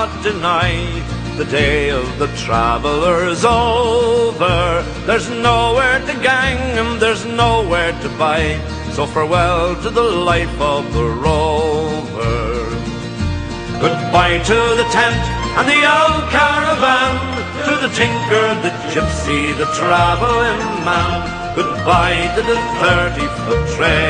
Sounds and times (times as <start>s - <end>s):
Music: 0.0s - 24.0s.